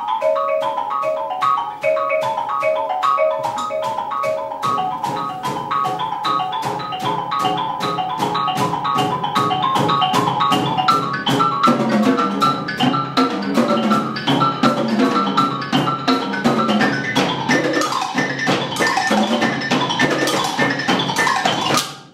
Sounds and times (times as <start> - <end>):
Marimba, xylophone: 0.0 - 22.1.